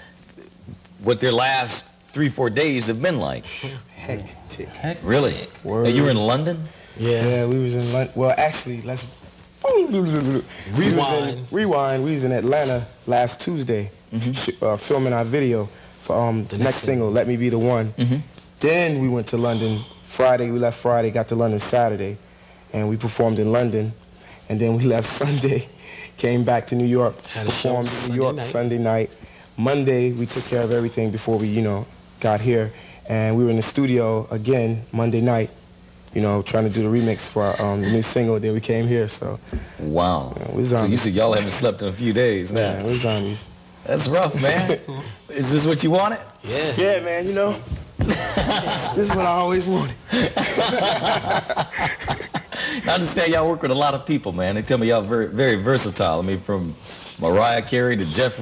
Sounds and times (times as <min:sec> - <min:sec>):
Speech: 0:00.4 - 0:47.7, 0:52.9 - 0:58.4.